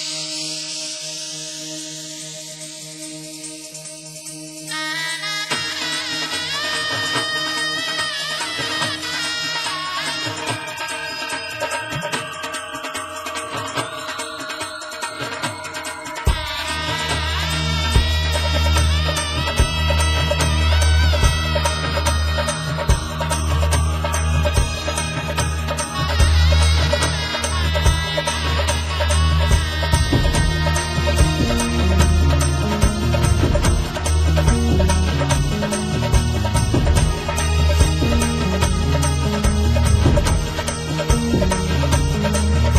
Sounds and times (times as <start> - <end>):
Traditional music: 0.0 - 42.7.